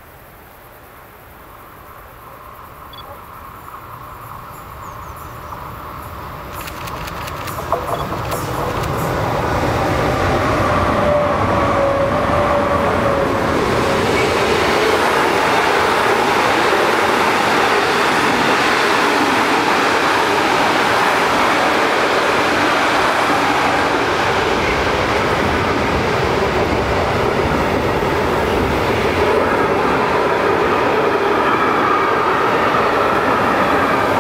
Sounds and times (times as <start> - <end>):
Train: 0.0 - 34.2.